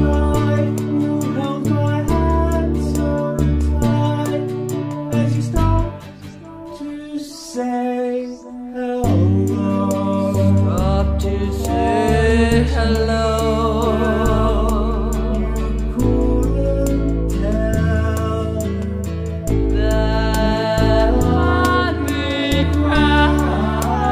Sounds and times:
Music: 0:00.0 - 0:24.1.

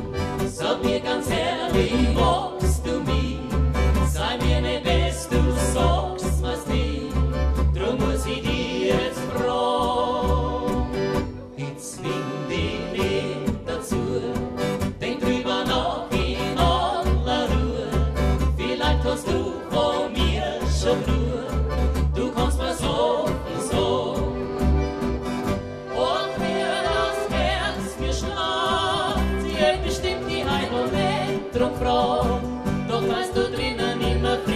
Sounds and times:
Music: 0:00.0 - 0:34.5.

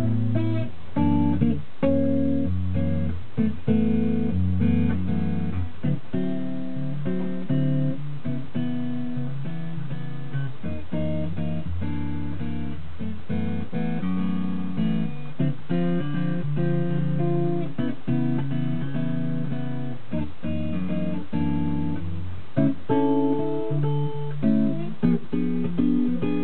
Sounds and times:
Acoustic guitar: 0:00.0 - 0:26.4.

